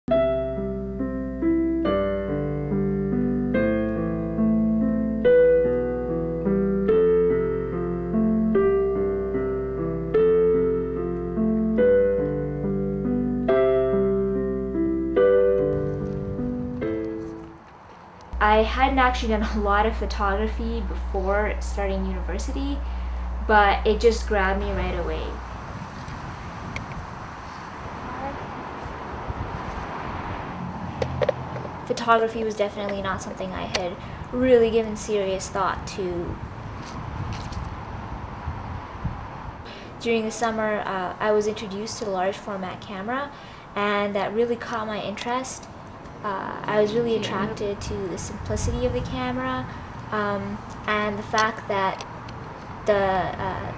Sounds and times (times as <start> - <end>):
Keyboard (musical): 0.1 - 17.9.